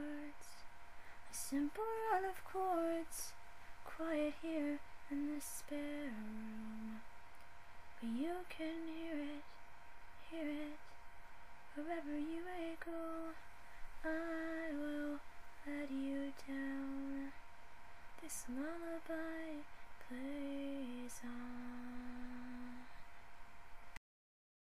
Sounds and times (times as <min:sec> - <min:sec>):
Lullaby: 0:00.0 - 0:11.0, 0:11.6 - 0:23.3.